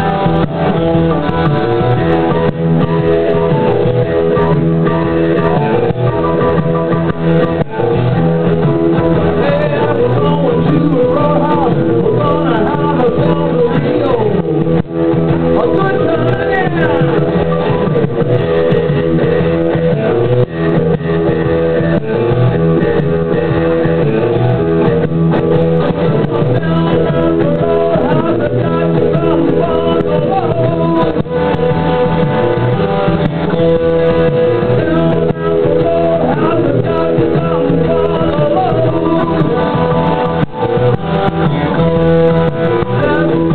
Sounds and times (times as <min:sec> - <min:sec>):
Electric guitar: 0:00.0 - 0:43.5.